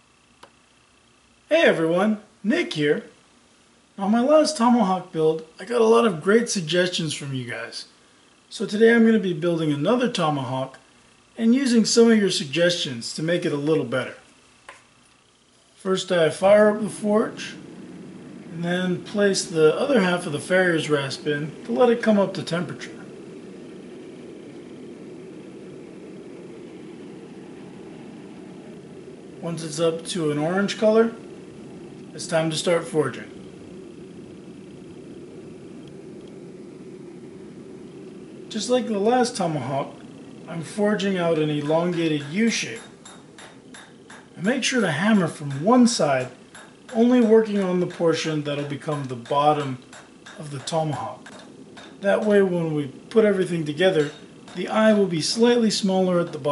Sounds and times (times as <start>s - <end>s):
Speech: 1.5s - 3.2s, 4.0s - 7.9s, 8.5s - 10.8s, 11.4s - 14.3s, 15.8s - 17.6s, 18.5s - 23.1s, 29.4s - 31.2s, 32.1s - 33.4s, 38.5s - 42.9s, 44.4s - 49.8s, 50.4s - 51.3s, 52.0s - 56.5s.